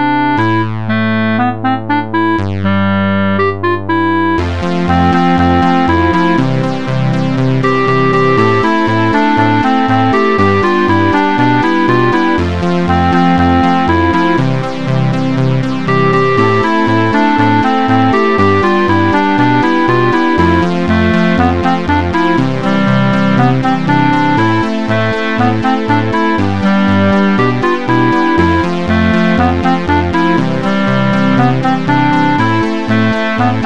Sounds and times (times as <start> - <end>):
Music: 0.0 - 33.6.